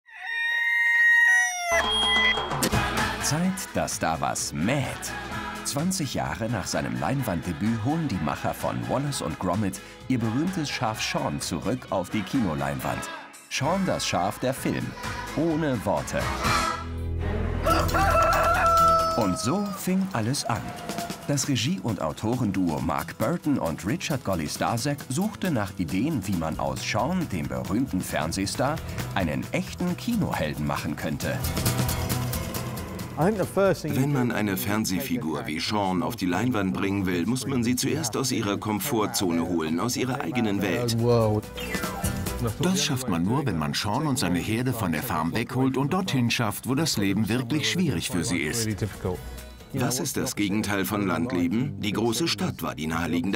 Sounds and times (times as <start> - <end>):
Music: 1.7 - 53.3
Speech: 3.2 - 16.3, 19.2 - 31.4, 33.2 - 53.3.